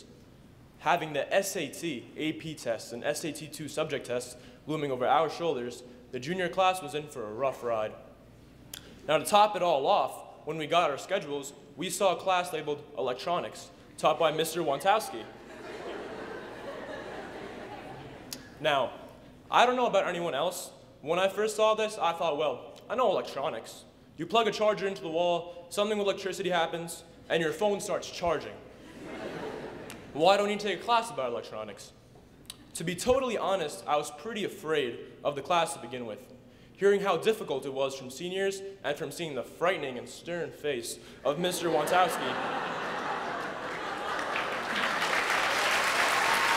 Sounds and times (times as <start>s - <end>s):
Narration, monologue: 0.0s - 44.2s
Male speech, man speaking: 0.8s - 8.0s, 9.1s - 15.3s, 18.6s - 28.6s, 30.2s - 32.0s, 32.7s - 36.2s, 36.8s - 42.4s.